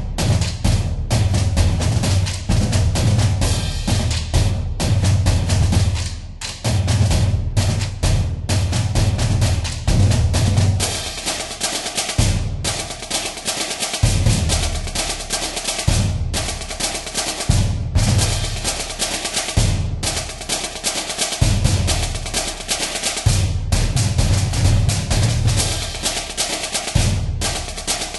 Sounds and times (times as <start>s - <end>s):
Percussion: 0.0s - 28.1s.